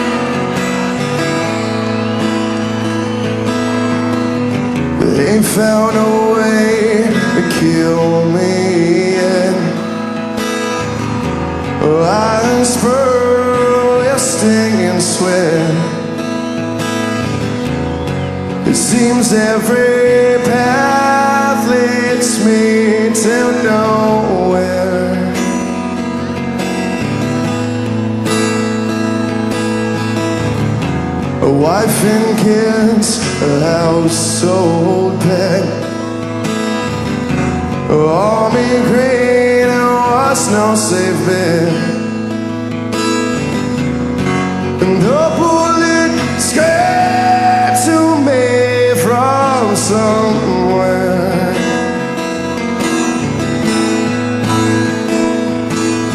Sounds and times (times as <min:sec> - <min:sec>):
Music: 0:00.0 - 0:56.1.